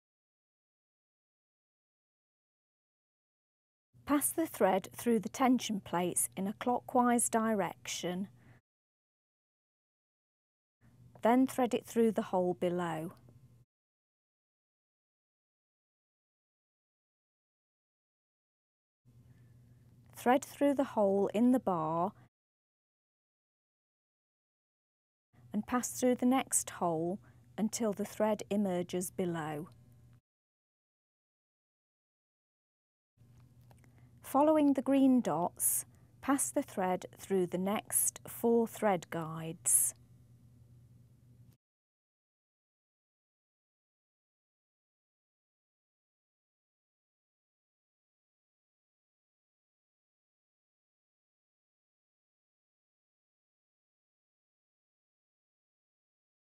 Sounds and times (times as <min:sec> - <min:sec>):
Speech: 0:04.1 - 0:08.4, 0:11.2 - 0:13.2, 0:20.2 - 0:22.2, 0:25.6 - 0:29.8, 0:34.3 - 0:40.0.